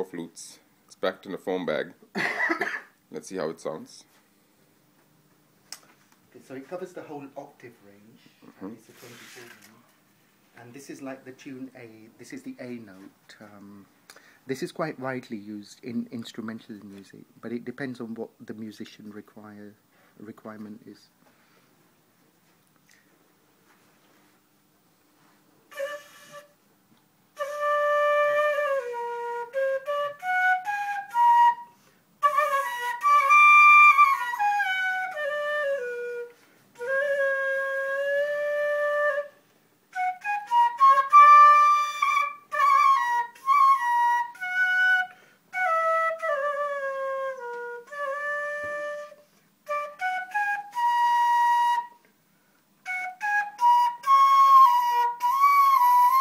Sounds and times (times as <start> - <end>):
Flute: 25.7 - 26.6, 27.4 - 52.1, 52.8 - 56.2.